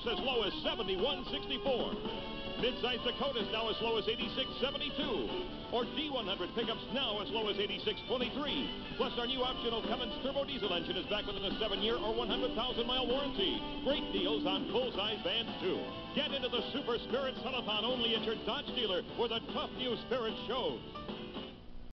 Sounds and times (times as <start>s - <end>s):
Speech: 0.0s - 2.0s, 2.6s - 20.8s
Music: 0.0s - 21.9s.